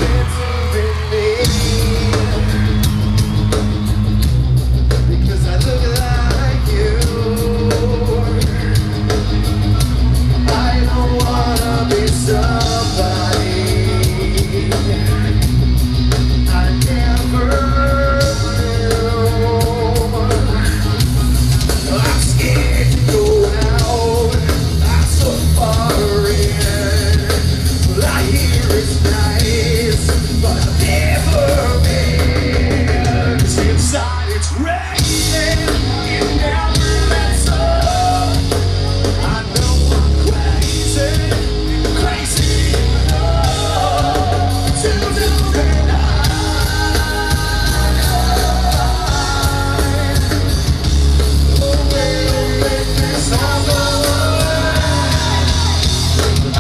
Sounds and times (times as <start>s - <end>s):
Music: 0.0s - 56.6s.